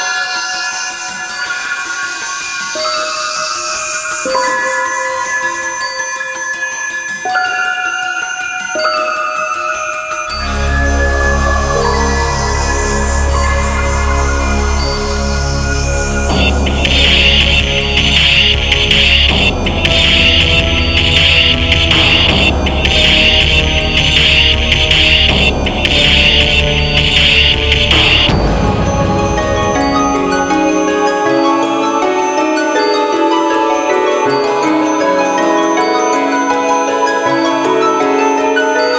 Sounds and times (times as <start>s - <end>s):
Scary music: 0.0s - 38.9s.